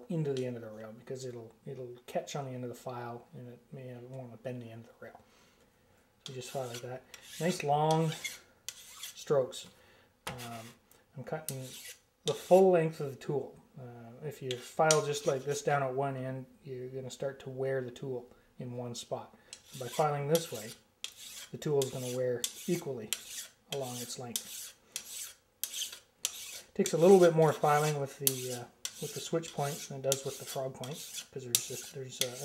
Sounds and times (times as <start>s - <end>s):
Filing (rasp): 6.2s - 9.3s, 11.5s - 12.6s, 14.5s - 15.5s, 19.5s - 32.4s
Rub: 6.2s - 9.3s, 10.4s - 10.8s, 11.5s - 12.6s, 14.5s - 15.6s, 19.5s - 32.4s.